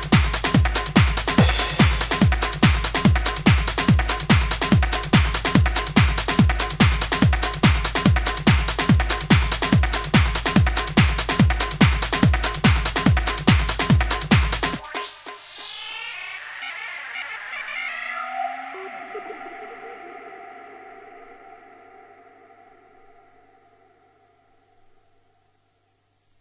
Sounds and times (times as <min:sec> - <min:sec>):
Techno: 0:00.0 - 0:22.8.